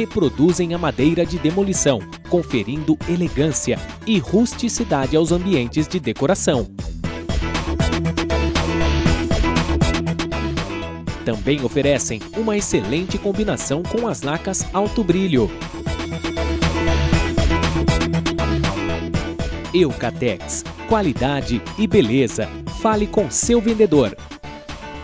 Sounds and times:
Speech: 0.0 - 6.7, 11.3 - 15.6, 19.7 - 24.2
Music: 0.0 - 25.0.

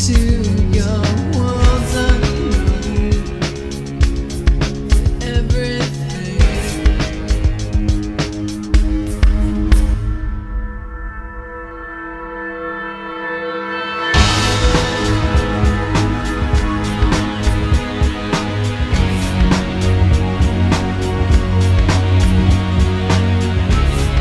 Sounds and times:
Music: 0.0 - 24.2.

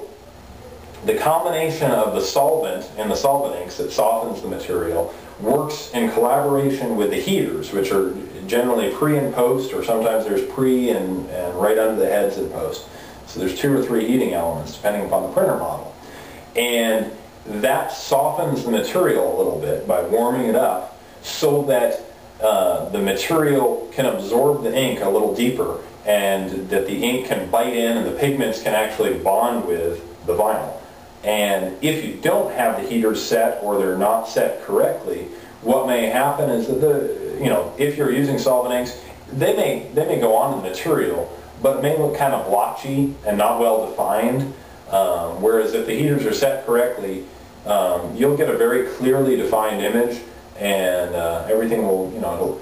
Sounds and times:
Speech: 1.0 - 52.6.

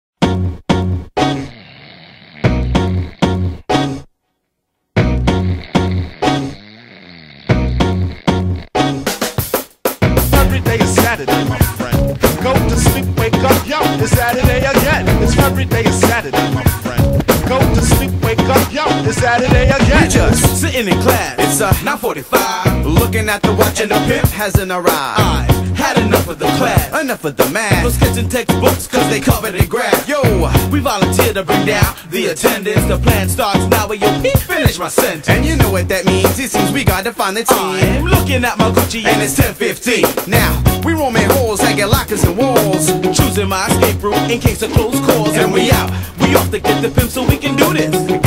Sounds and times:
Music: 0.2 - 1.6, 2.4 - 4.1, 4.9 - 48.2.

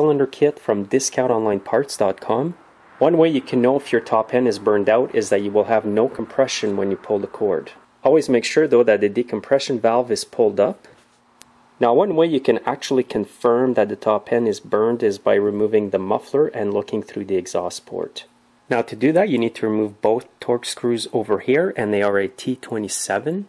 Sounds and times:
Speech: 0.0 - 11.0, 11.8 - 23.4.

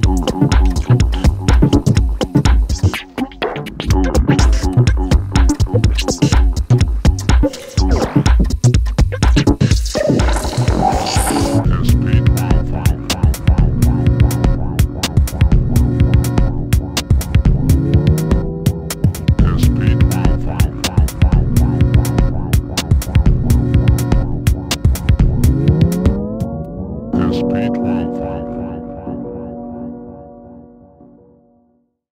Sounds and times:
Music: 0.0 - 32.1.

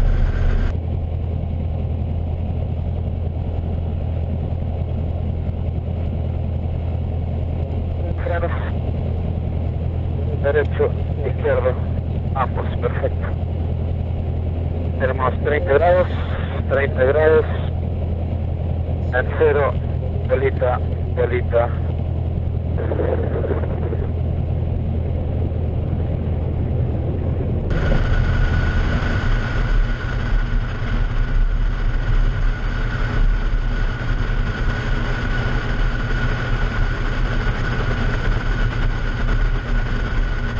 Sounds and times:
Speech: 8.0 - 8.8, 10.3 - 13.4, 15.0 - 17.7, 19.0 - 21.9.

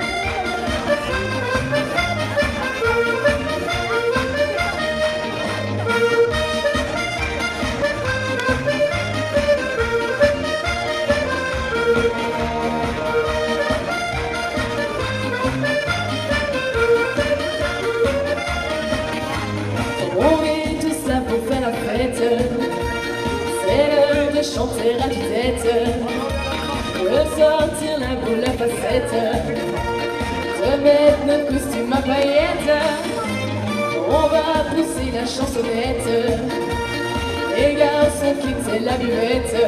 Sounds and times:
Music: 0.0 - 39.6.

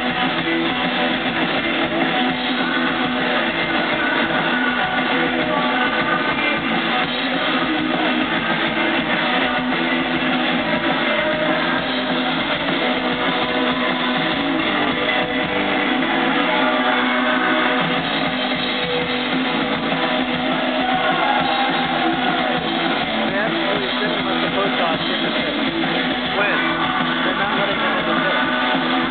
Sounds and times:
Music: 0.0 - 29.1
Speech: 23.2 - 29.1.

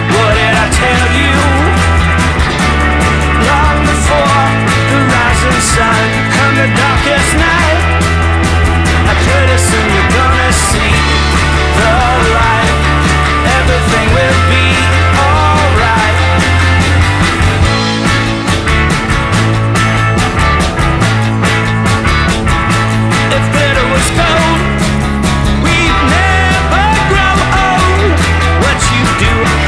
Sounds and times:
Music: 0.0 - 29.6.

